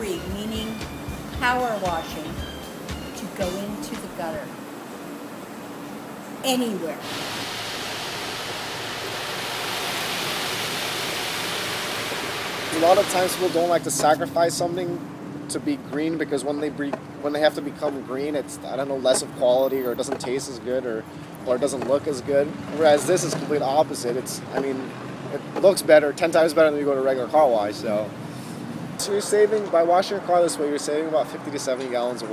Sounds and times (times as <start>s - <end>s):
Speech: 1.4s - 2.4s, 3.2s - 4.5s, 6.4s - 7.0s, 12.7s - 28.1s, 29.0s - 32.3s.